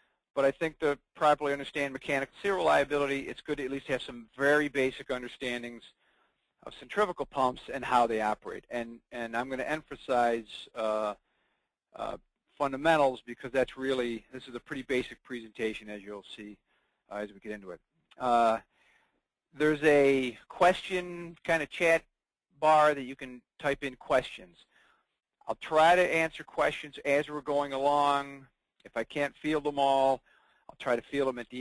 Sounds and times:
Speech: 0.4s - 6.0s, 6.6s - 11.2s, 12.0s - 18.7s, 19.6s - 24.7s, 25.5s - 31.6s.

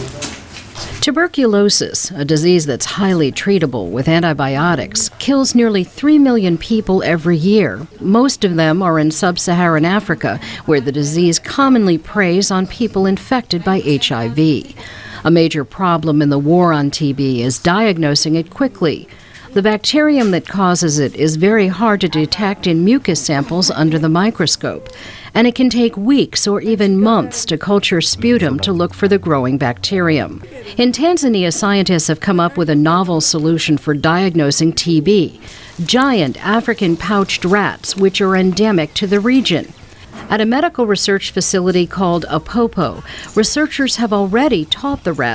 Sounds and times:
Speech: 1.0s - 39.7s, 40.3s - 45.3s.

